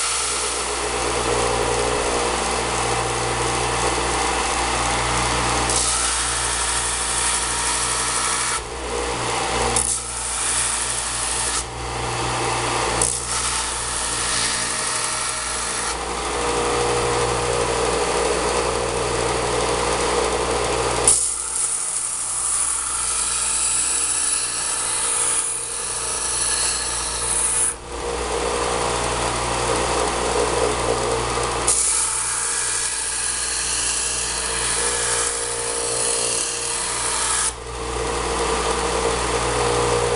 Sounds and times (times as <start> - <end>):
Power tool: 0.0 - 40.1.